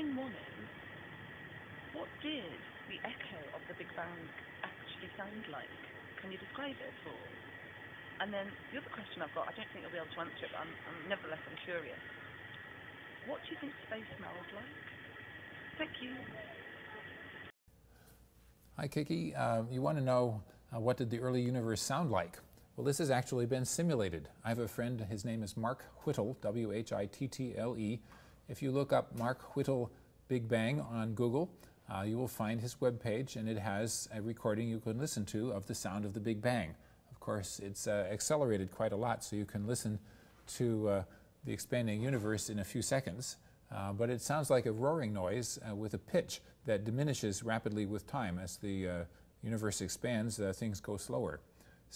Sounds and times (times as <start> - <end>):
Speech: 0.0 - 0.8, 2.0 - 7.4, 8.2 - 12.0, 13.3 - 14.8, 15.8 - 16.6, 18.8 - 51.9.